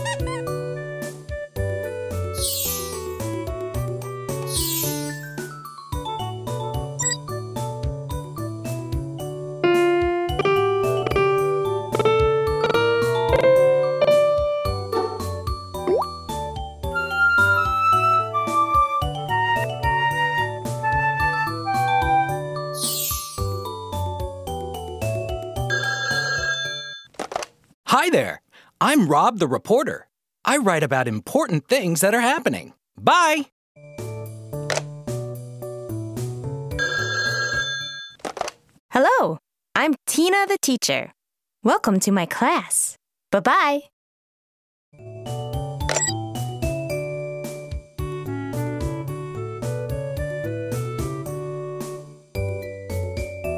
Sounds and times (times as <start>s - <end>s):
Music: 0.0s - 26.0s, 33.8s - 37.0s, 45.0s - 53.5s.